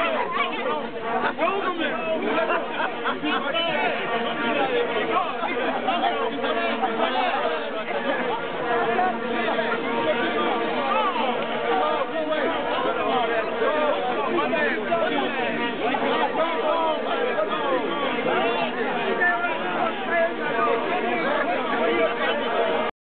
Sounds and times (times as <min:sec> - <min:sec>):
Speech: 0:00.0 - 0:23.0.